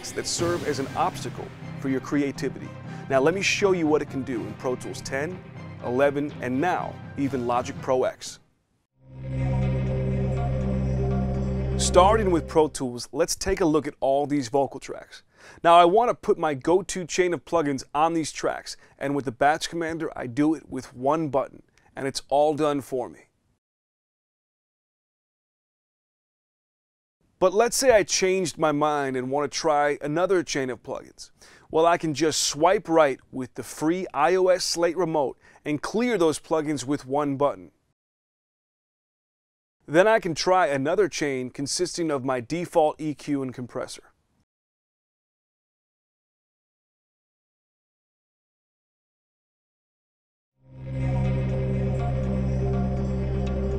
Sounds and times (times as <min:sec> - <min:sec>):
Music: 0:00.0 - 0:08.4, 0:09.0 - 0:12.9, 0:50.6 - 0:53.7
Speech: 0:00.0 - 0:08.4, 0:11.8 - 0:23.3, 0:27.4 - 0:37.8, 0:39.9 - 0:44.1.